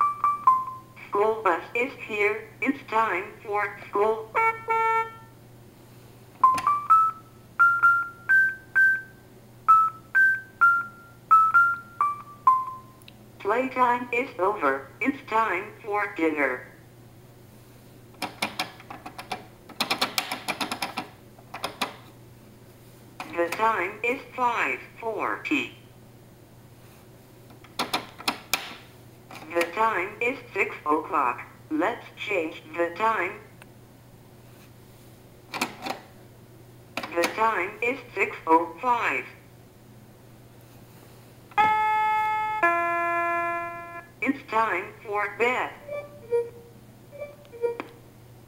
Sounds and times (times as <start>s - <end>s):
Speech: 1.0s - 4.4s, 13.4s - 16.8s, 23.2s - 25.8s, 29.4s - 33.5s, 37.1s - 39.4s, 44.2s - 45.8s.